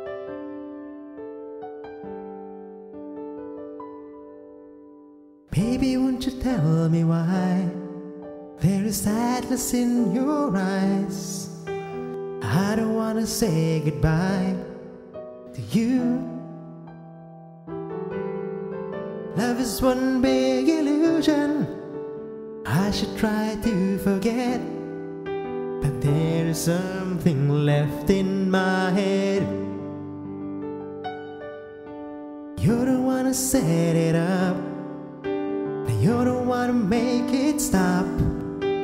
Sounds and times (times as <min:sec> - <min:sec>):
Tender music: 0:00.0 - 0:38.8.